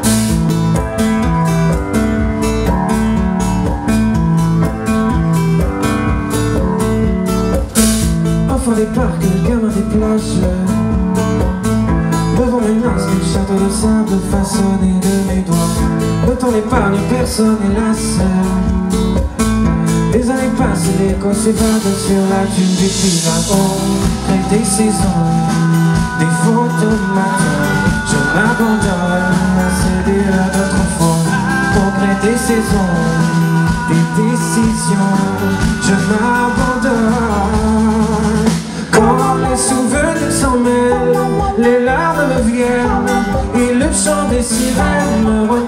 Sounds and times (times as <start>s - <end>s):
Music: 0.0s - 45.6s.